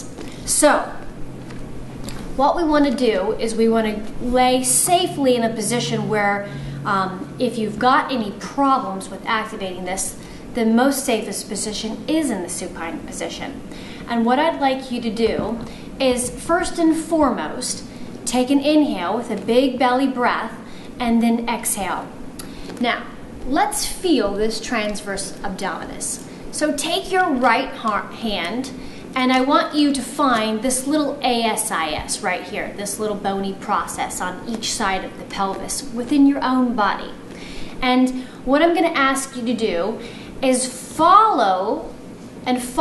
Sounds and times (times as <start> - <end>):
Female speech, woman speaking: 0.0 - 1.0, 2.4 - 22.1, 22.8 - 37.2, 37.8 - 41.9, 42.5 - 42.8.